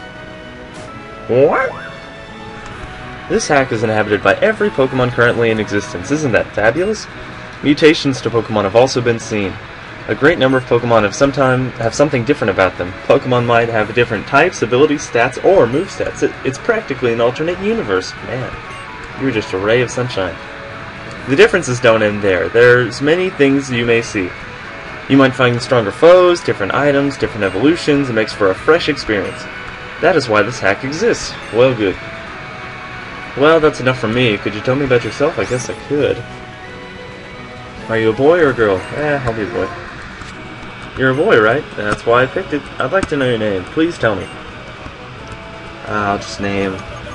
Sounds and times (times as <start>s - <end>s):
Music: 0.0s - 47.1s
Speech: 1.3s - 1.9s, 3.3s - 18.6s, 19.2s - 20.4s, 21.3s - 24.3s, 25.1s - 32.0s, 33.4s - 36.2s, 37.8s - 39.8s, 41.0s - 44.3s, 45.9s - 47.1s.